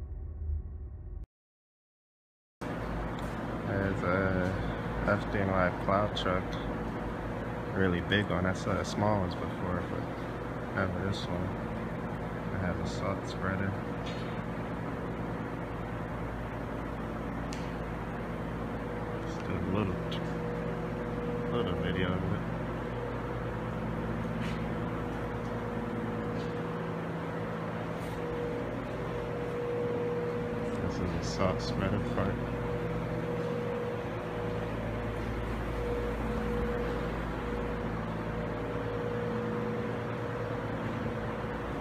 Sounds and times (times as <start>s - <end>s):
Speech: 3.7s - 6.7s, 7.7s - 10.0s, 10.7s - 11.6s, 12.5s - 13.8s, 19.3s - 20.4s, 21.5s - 22.4s, 30.7s - 32.4s.